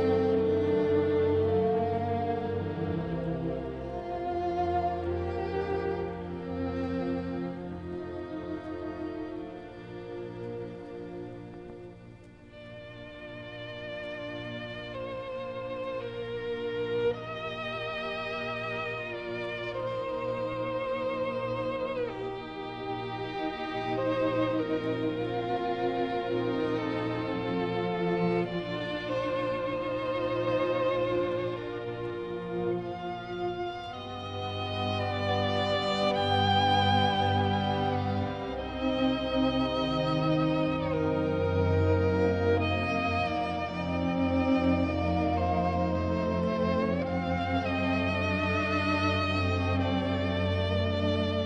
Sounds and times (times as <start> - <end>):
Violin, fiddle: 0.0 - 51.4.